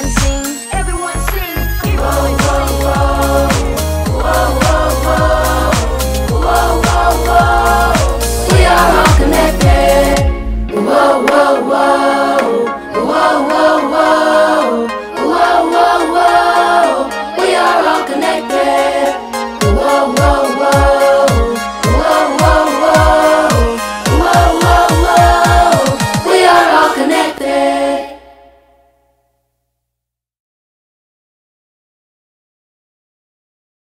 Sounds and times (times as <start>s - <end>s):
Music: 0.0s - 29.6s.